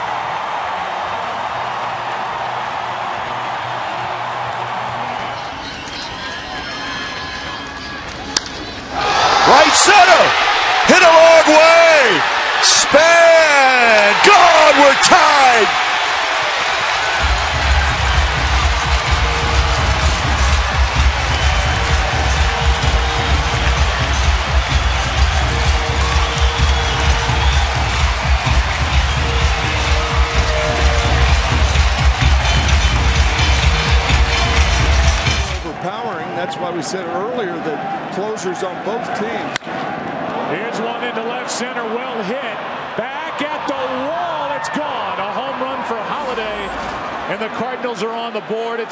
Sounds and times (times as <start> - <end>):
Speech: 9.5 - 10.3, 10.9 - 15.7, 35.6 - 39.5, 40.5 - 48.9.